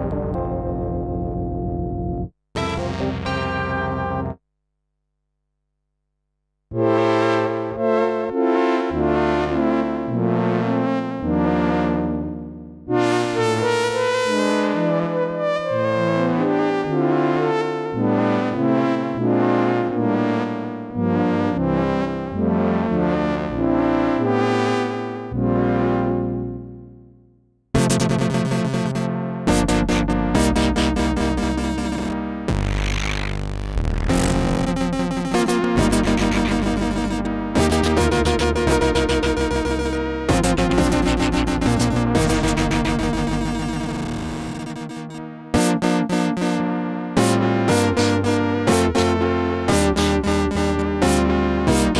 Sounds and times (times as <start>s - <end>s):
Music: 0.0s - 4.4s, 6.7s - 51.9s.